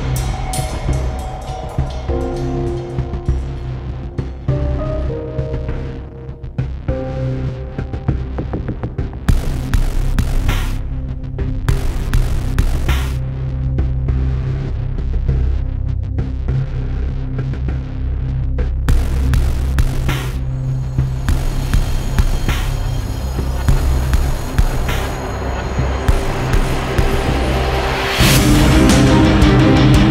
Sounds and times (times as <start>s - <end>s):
Music: 0.0s - 30.1s.